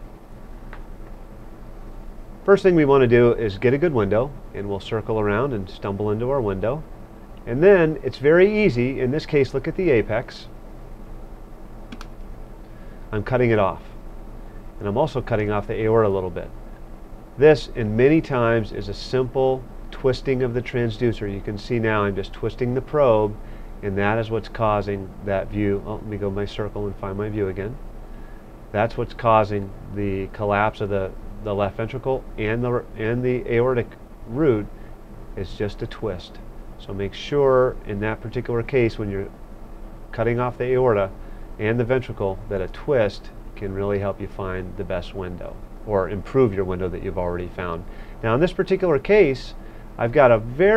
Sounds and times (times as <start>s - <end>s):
Speech: 2.5s - 6.9s, 7.5s - 10.5s, 13.1s - 14.0s, 14.8s - 16.6s, 17.4s - 27.8s, 28.7s - 34.7s, 35.4s - 39.4s, 40.1s - 50.7s.